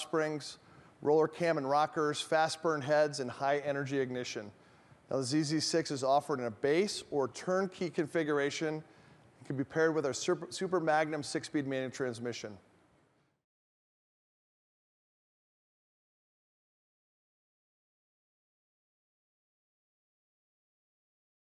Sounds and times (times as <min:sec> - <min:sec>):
Speech: 0:00.0 - 0:12.7.